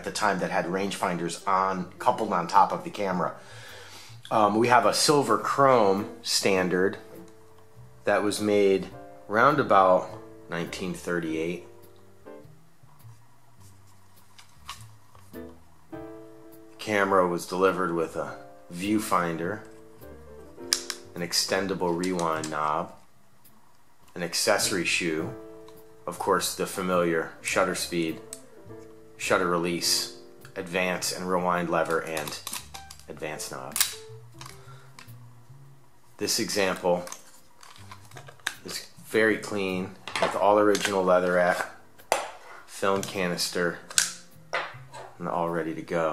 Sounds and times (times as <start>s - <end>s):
Speech: 0.0s - 3.4s, 4.3s - 7.0s, 8.1s - 11.7s, 16.8s - 19.6s, 21.2s - 23.0s, 24.2s - 25.4s, 26.1s - 28.2s, 29.2s - 32.5s, 33.1s - 33.8s, 36.2s - 37.2s, 38.6s - 41.8s, 42.7s - 43.9s, 45.2s - 46.1s.